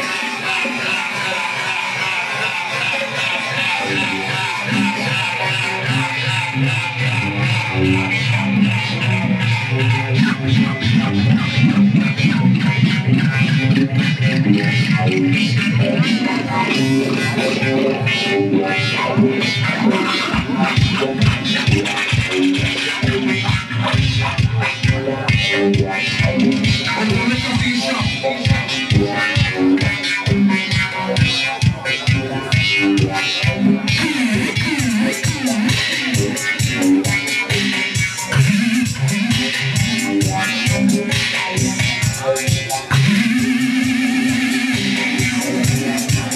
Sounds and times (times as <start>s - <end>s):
Music: 0.0s - 46.3s
Speech: 0.0s - 46.3s.